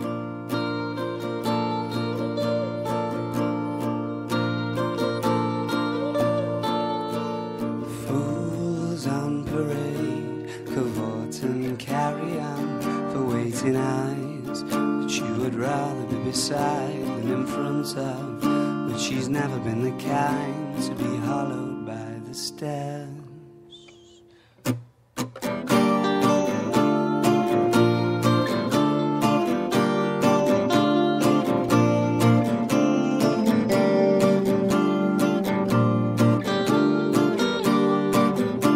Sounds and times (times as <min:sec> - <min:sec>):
Music: 0:00.0 - 0:38.7.